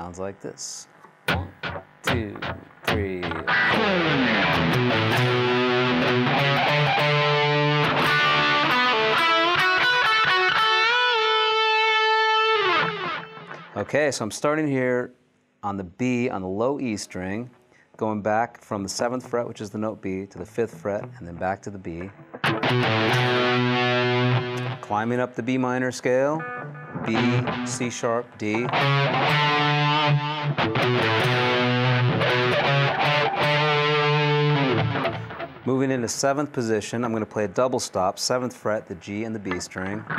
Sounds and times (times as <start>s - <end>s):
Speech: 0.0s - 3.4s, 13.8s - 22.1s, 24.8s - 26.4s, 27.1s - 28.8s, 35.6s - 40.1s
Electric guitar: 1.0s - 13.9s, 20.3s - 36.0s, 39.4s - 40.1s.